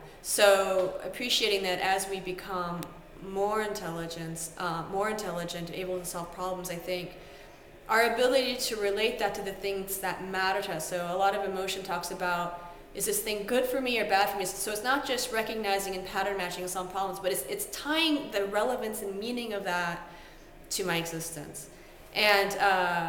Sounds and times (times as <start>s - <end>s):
Speech: 0.2s - 7.1s, 7.9s - 20.0s, 20.7s - 23.0s.